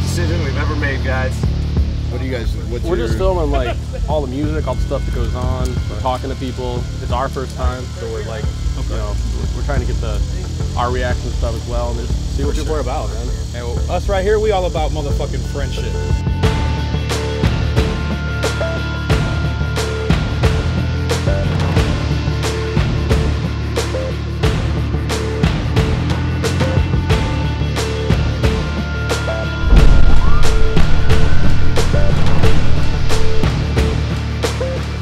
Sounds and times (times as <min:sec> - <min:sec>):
Speech: 0:00.0 - 0:01.4, 0:02.1 - 0:16.1
Music: 0:00.0 - 0:35.0.